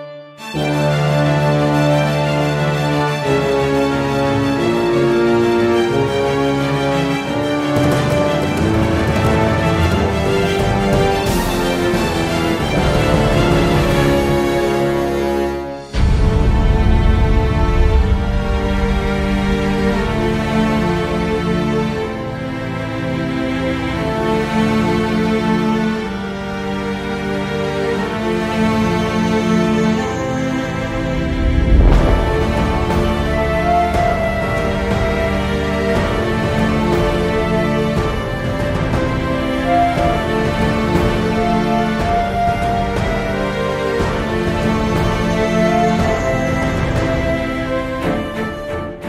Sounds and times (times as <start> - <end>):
Soundtrack music: 0.0 - 49.0
Tender music: 0.0 - 49.0.